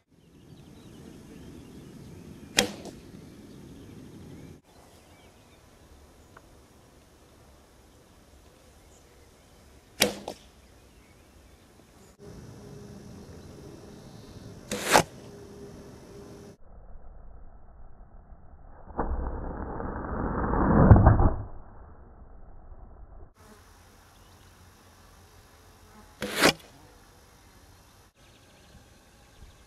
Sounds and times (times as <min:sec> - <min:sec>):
Arrow: 0:02.5 - 0:03.1, 0:10.0 - 0:10.5, 0:14.7 - 0:15.3, 0:20.4 - 0:21.6, 0:26.2 - 0:26.8.